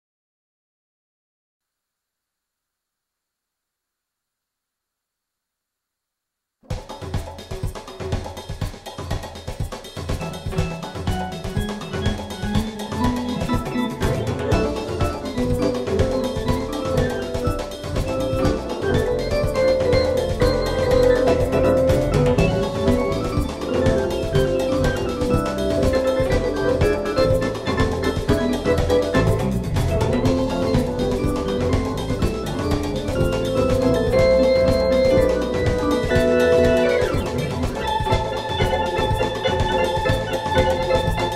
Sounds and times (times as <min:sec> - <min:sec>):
Music: 0:06.6 - 0:41.3.